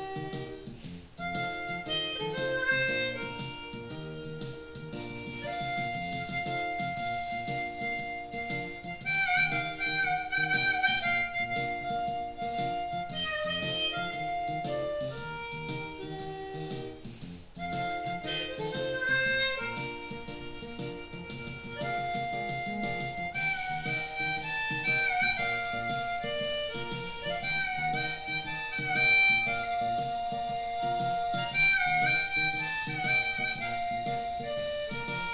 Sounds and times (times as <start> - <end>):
Blues: 0.0 - 35.3.